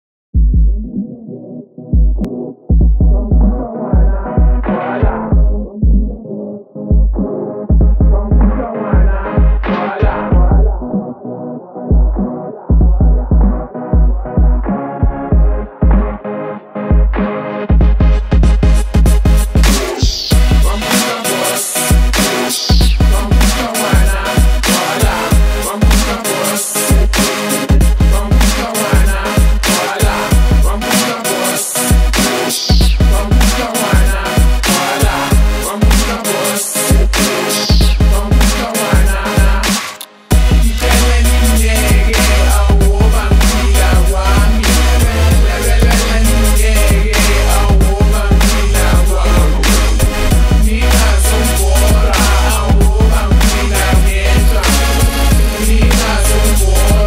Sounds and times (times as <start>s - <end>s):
Music: 0.4s - 57.0s.